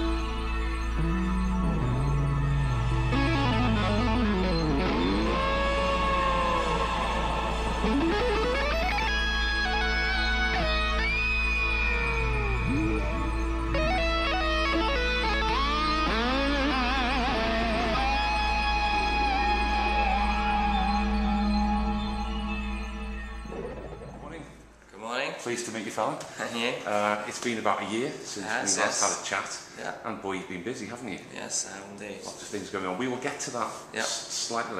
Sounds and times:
Music: 0:00.0 - 0:24.6
Speech: 0:24.2 - 0:34.7.

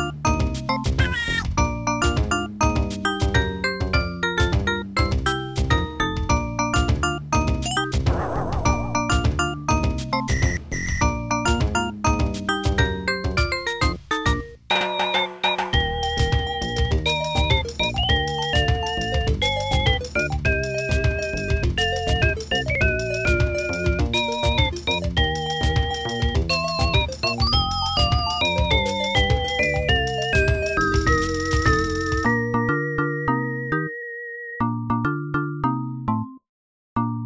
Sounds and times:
Music: 0:00.0 - 0:37.2.

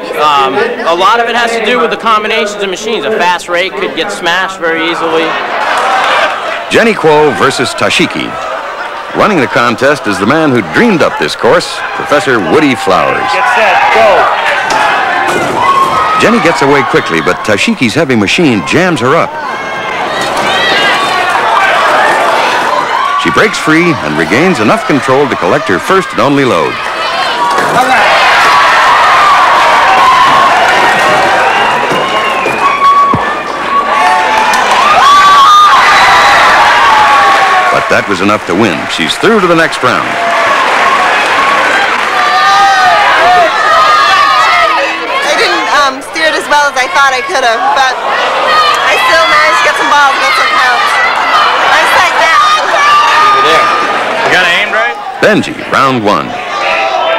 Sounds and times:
Speech: 0:23.2 - 0:26.8, 0:37.8 - 0:40.1.

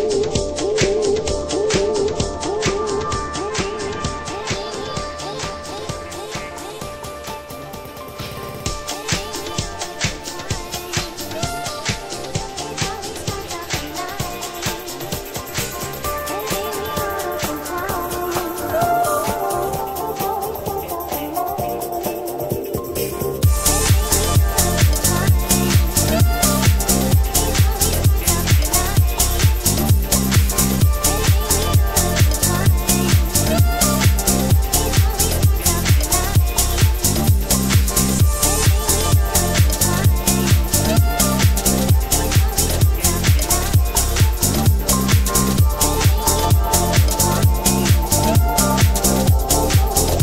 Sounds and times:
House music: 0:00.0 - 0:50.2.

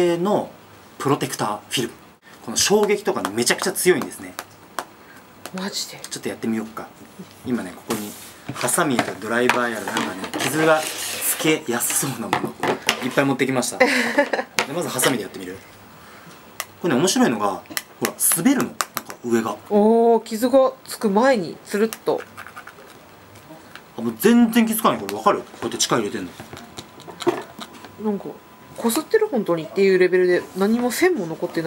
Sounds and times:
Speech: 0:00.0 - 0:04.4, 0:28.0 - 0:31.6.

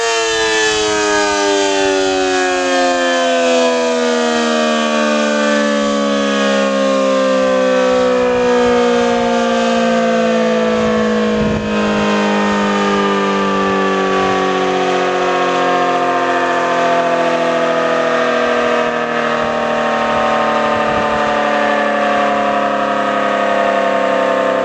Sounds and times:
Civil defense siren: 0:00.0 - 0:24.6.

